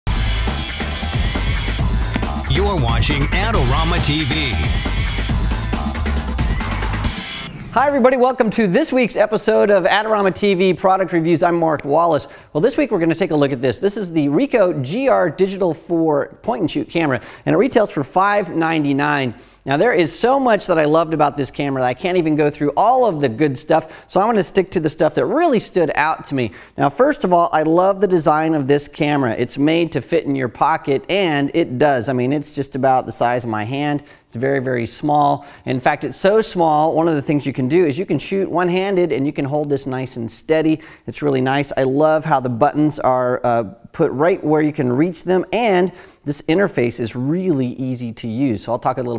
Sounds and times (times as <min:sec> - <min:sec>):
Speech: 0:02.5 - 0:04.7, 0:07.8 - 0:49.1.